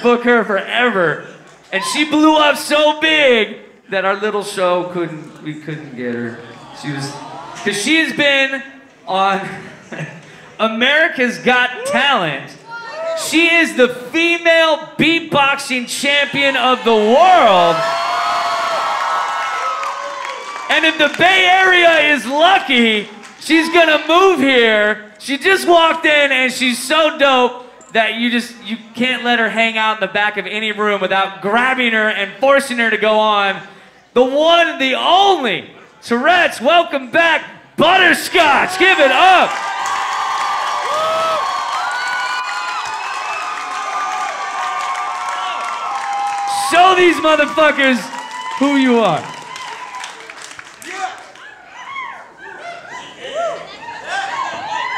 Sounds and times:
Speech: 0.0 - 9.6, 10.6 - 12.6, 13.2 - 17.8, 20.7 - 39.5, 46.5 - 49.3
Applause: 17.8 - 21.9, 23.0 - 23.4, 39.4 - 51.6.

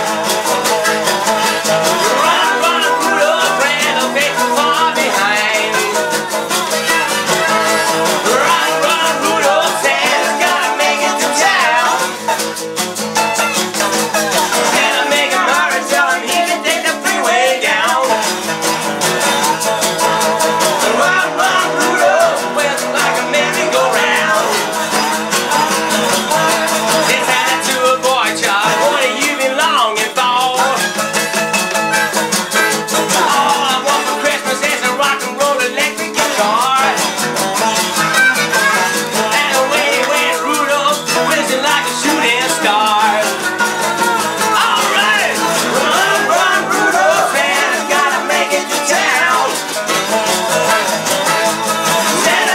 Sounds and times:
Music: 0.0 - 52.5.

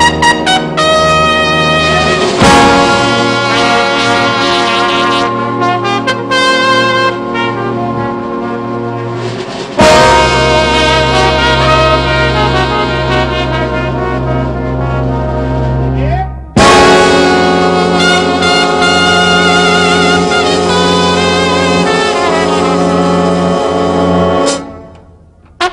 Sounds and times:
Orchestra: 0.0 - 25.7.

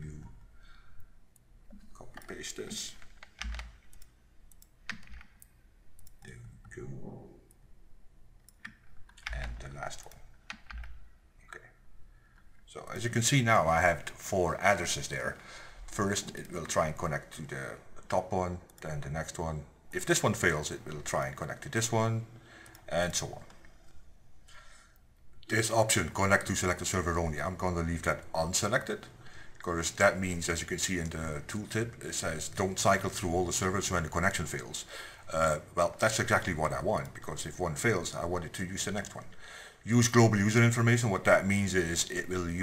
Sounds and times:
Speech: 0.0 - 0.4, 1.9 - 3.0, 6.2 - 7.4, 9.2 - 10.2, 11.5 - 11.8, 12.7 - 23.5, 25.4 - 42.6
Clicking: 3.0 - 6.8, 22.6 - 22.8.

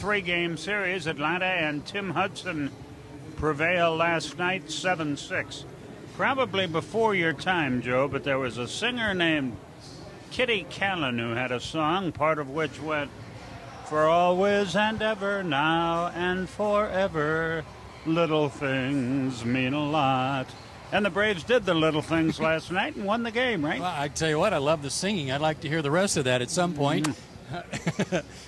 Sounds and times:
Speech: 0.0 - 2.7, 3.4 - 9.6, 10.2 - 13.1, 13.8 - 27.8
Male singing: 14.0 - 20.5.

